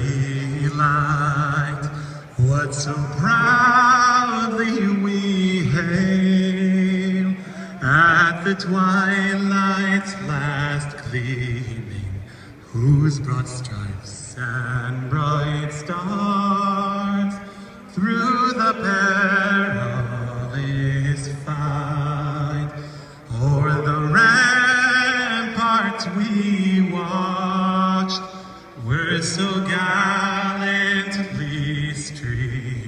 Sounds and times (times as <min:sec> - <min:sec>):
Male singing: 0:00.0 - 0:32.8.